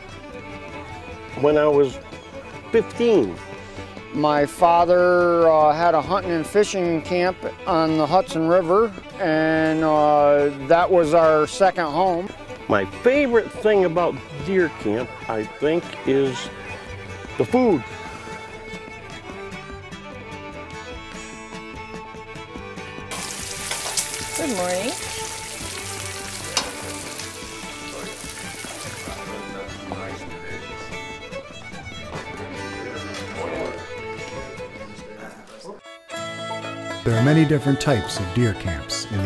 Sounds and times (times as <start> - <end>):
Sizzle: 23.1 - 29.3.